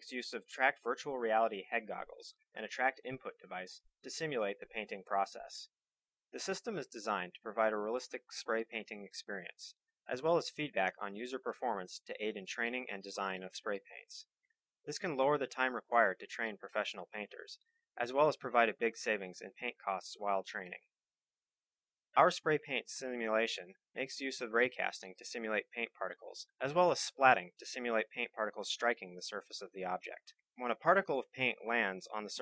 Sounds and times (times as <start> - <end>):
Speech: 0.0 - 5.8, 6.4 - 20.9, 22.2 - 32.4.